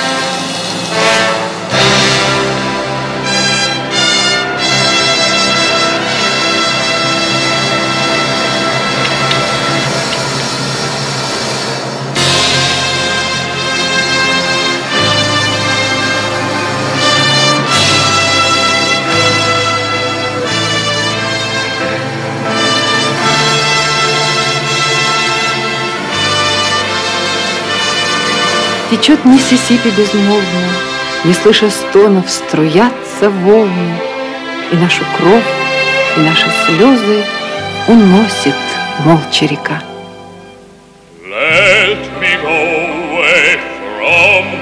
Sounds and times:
Music: 0.0s - 44.6s.

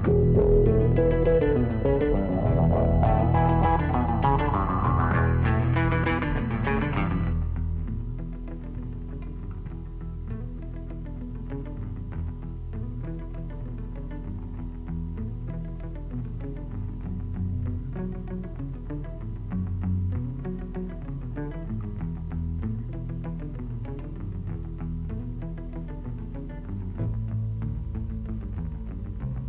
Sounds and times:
Music: 0.0s - 29.4s.

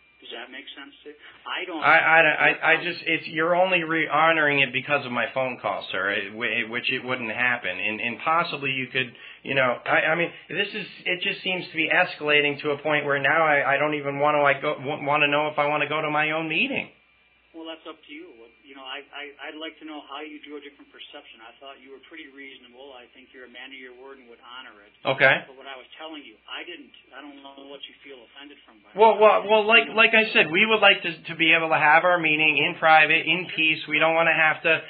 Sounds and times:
Speech: 0.2s - 16.9s, 17.6s - 34.8s.

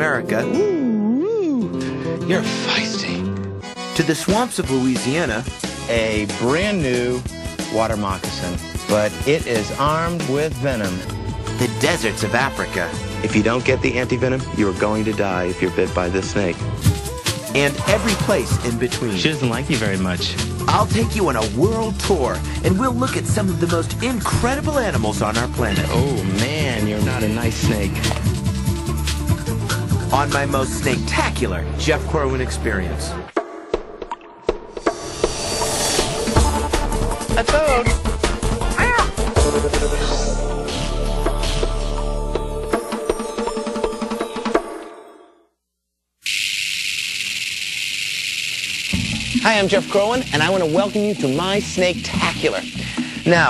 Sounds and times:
Music: 0.0s - 45.6s, 48.8s - 53.5s
Speech: 4.0s - 11.0s, 11.6s - 16.6s, 17.5s - 28.1s, 30.1s - 33.3s, 49.4s - 53.5s.

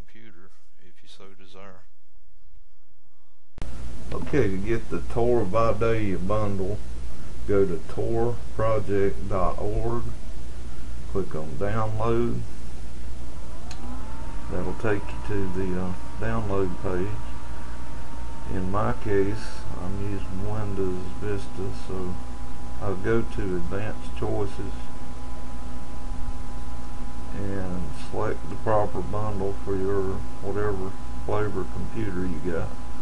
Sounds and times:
Speech: 0.0s - 1.9s, 4.2s - 6.8s, 7.5s - 10.2s, 11.1s - 12.5s, 14.5s - 17.3s, 18.5s - 22.2s, 22.8s - 24.9s, 27.3s - 32.7s.

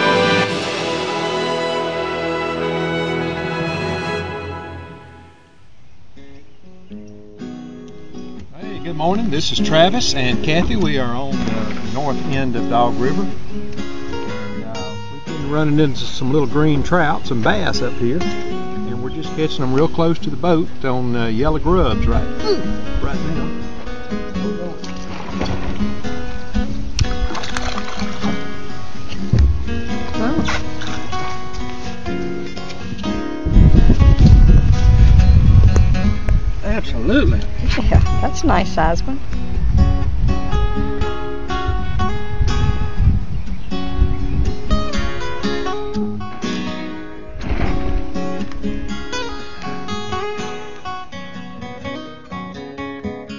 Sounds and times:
Music: 0.0s - 53.3s
Speech: 8.6s - 13.3s, 14.6s - 18.2s, 18.8s - 23.5s.

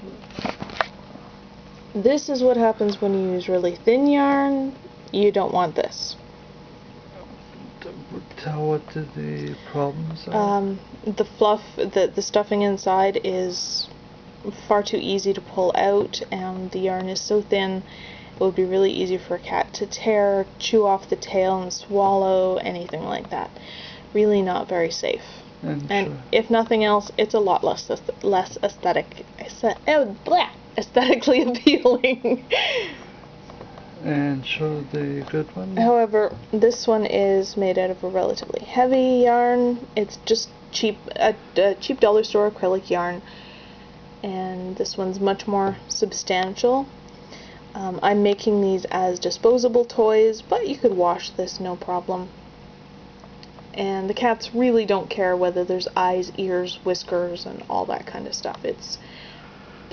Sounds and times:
Speech: 2.0s - 6.2s, 7.6s - 13.9s, 14.5s - 17.8s, 18.4s - 23.5s, 24.2s - 32.0s, 34.0s - 43.2s, 47.8s - 52.3s, 53.8s - 59.0s.

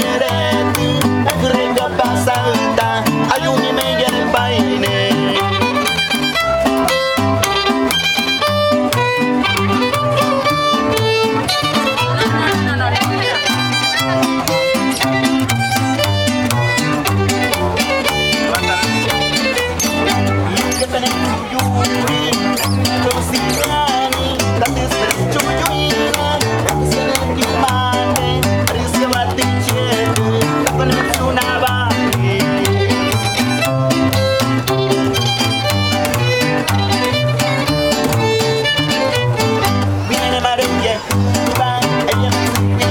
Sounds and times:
Blues: 0.0s - 42.9s
Speech: 11.6s - 15.2s, 17.8s - 33.0s.

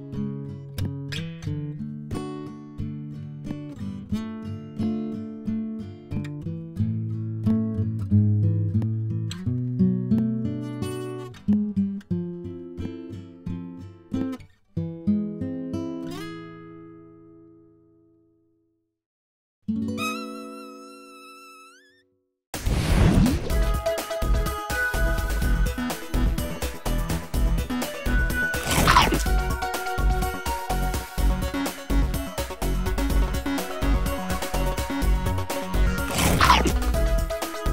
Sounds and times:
Music: 0.0s - 18.7s, 19.7s - 37.7s.

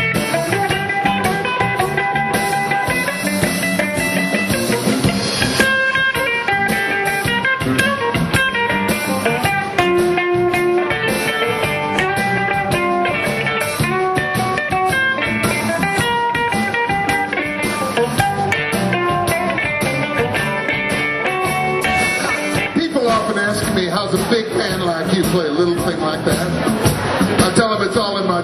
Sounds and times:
Blues: 0.0s - 28.4s
Guitar: 0.0s - 28.4s
Speech: 22.8s - 26.7s, 27.4s - 28.4s.

